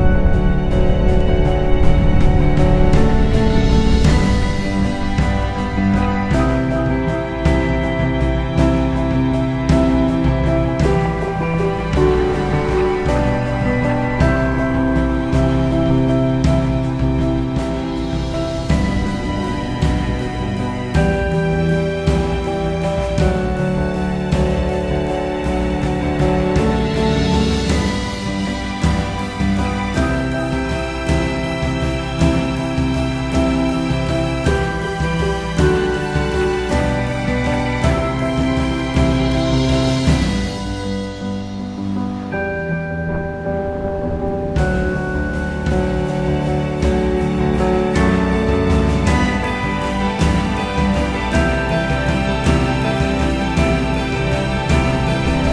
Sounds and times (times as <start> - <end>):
Background music: 0.0 - 55.5.